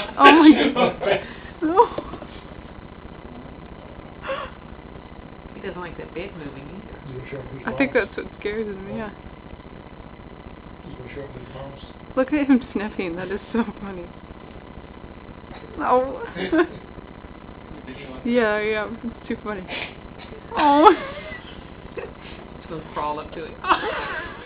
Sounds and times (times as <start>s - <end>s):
Speech: 5.6s - 9.1s, 10.9s - 14.0s.